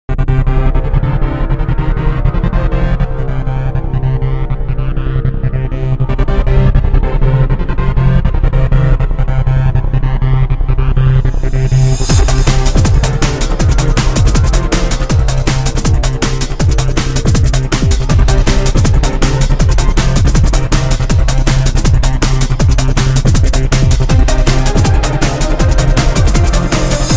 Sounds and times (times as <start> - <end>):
Music: 0.1 - 27.1.